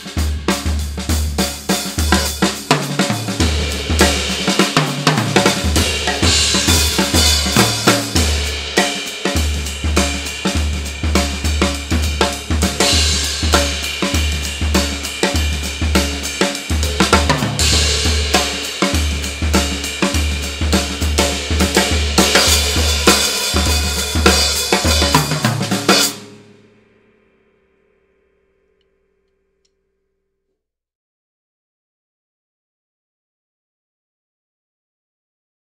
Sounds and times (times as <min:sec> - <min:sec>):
Music: 0:00.0 - 0:30.6.